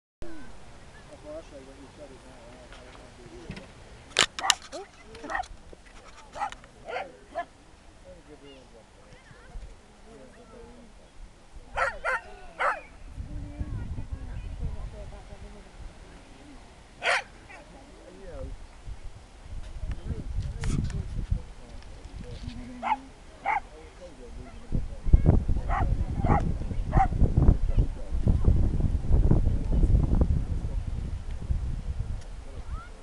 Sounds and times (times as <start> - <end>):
Outside, rural or natural: 0.2 - 33.0.